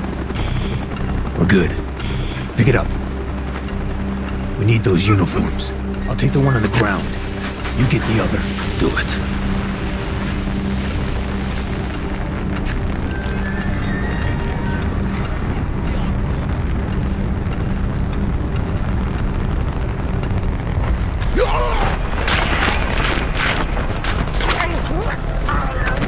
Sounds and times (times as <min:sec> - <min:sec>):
Music: 0:00.0 - 0:26.0
Outside, urban or manmade: 0:00.0 - 0:26.0.